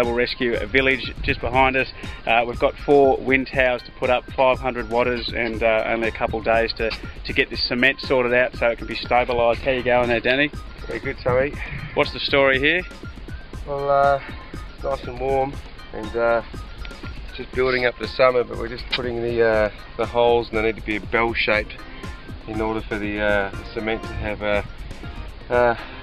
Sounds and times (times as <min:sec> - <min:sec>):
Speech: 0:00.0 - 0:12.9, 0:13.7 - 0:14.3, 0:14.9 - 0:16.4, 0:17.4 - 0:21.8, 0:22.5 - 0:24.6, 0:25.5 - 0:25.8
Music: 0:00.0 - 0:26.0.